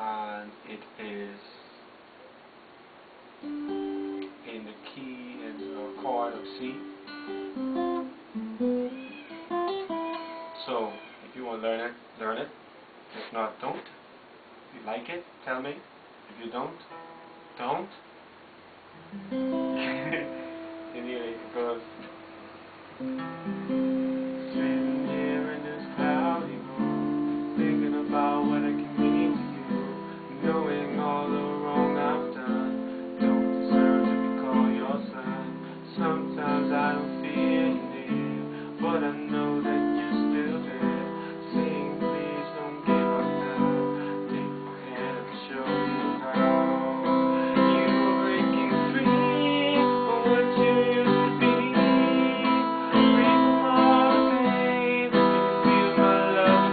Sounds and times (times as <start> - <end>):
Speech: 0.0 - 1.8, 4.4 - 6.9, 10.6 - 14.0, 14.7 - 16.9, 17.6 - 18.1, 21.0 - 22.1
Music: 3.4 - 11.0, 16.9 - 17.6, 19.0 - 56.7.